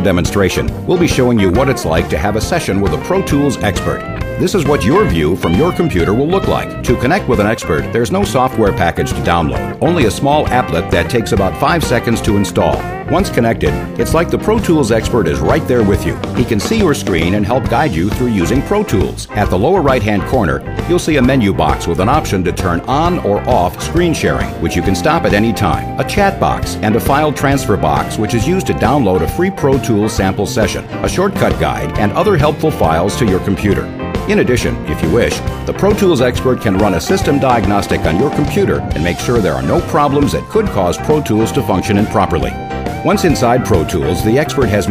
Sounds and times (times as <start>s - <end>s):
Music: 0.0s - 44.9s
Speech: 0.0s - 44.9s.